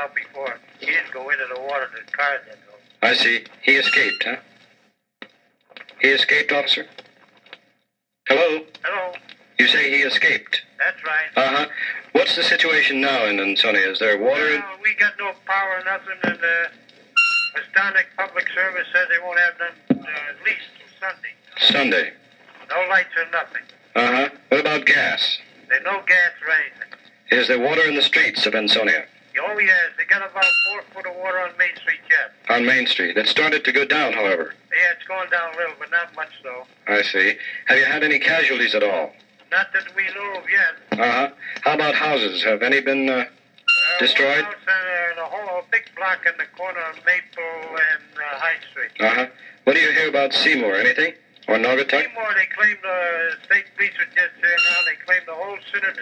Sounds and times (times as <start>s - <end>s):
Speech: 0.0s - 4.4s, 5.9s - 7.0s, 8.3s - 16.8s, 17.6s - 43.3s, 43.9s - 56.0s.